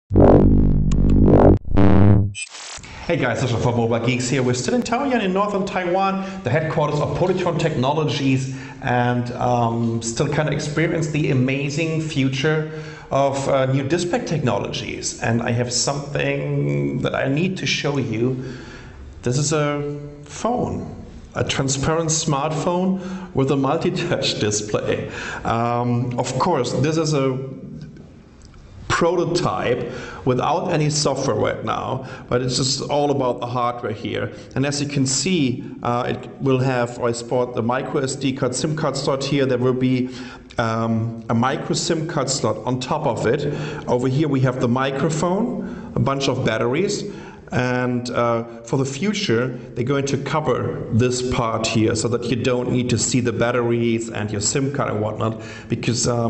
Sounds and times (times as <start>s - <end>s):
Speech: 3.0s - 18.5s, 19.2s - 27.8s, 28.9s - 56.2s.